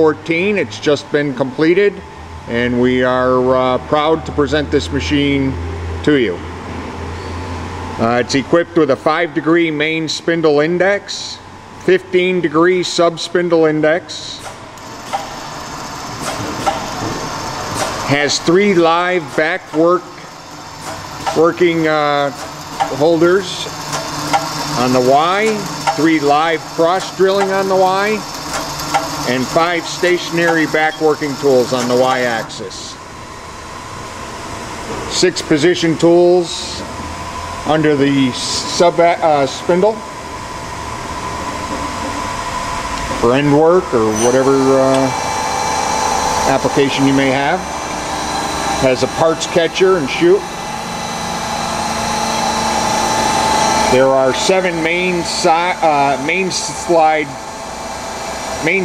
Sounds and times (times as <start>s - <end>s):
Speech: 0.0s - 6.4s, 8.0s - 14.5s, 18.1s - 20.2s, 21.4s - 23.7s, 24.8s - 28.3s, 29.3s - 33.0s, 35.1s - 36.9s, 37.7s - 40.1s, 43.2s - 45.2s, 46.5s - 47.7s, 48.8s - 50.5s, 53.9s - 57.4s, 58.6s - 58.8s.